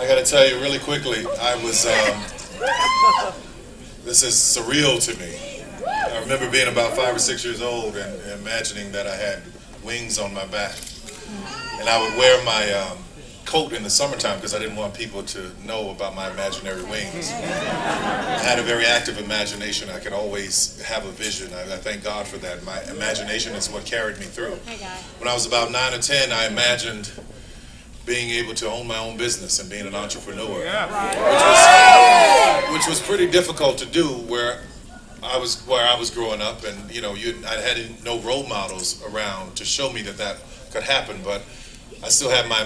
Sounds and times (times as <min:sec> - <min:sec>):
Male speech, man speaking: 0:00.0 - 0:02.4, 0:04.0 - 0:10.9, 0:11.6 - 0:17.5, 0:18.3 - 0:27.2, 0:28.1 - 0:31.2, 0:32.6 - 0:34.6, 0:35.2 - 0:41.4, 0:42.0 - 0:42.6
Narration, monologue: 0:00.0 - 0:31.6, 0:32.4 - 0:42.6.